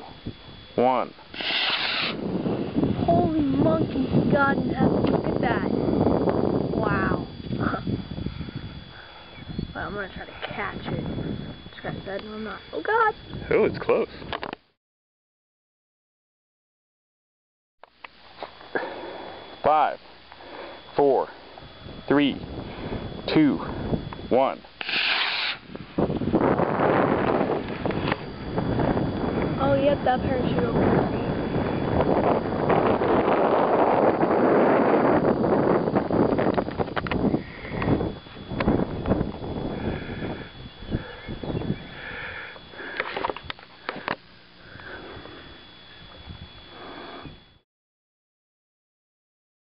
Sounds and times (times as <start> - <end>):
Outside, rural or natural: 0.0 - 14.8, 17.8 - 47.6.